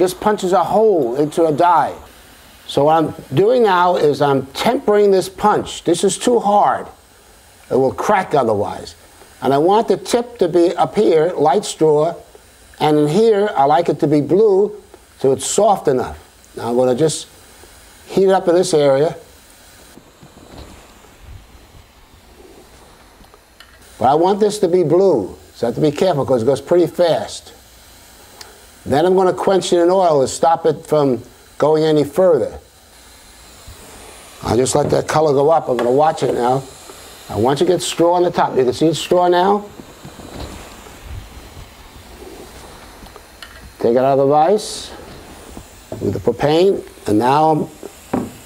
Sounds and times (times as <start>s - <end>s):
Speech: 0.0s - 2.1s, 2.7s - 7.0s, 7.7s - 17.3s, 18.1s - 19.3s, 24.0s - 27.6s, 28.8s - 32.6s, 34.4s - 36.7s, 37.3s - 39.7s, 43.8s - 45.0s, 46.0s - 47.8s.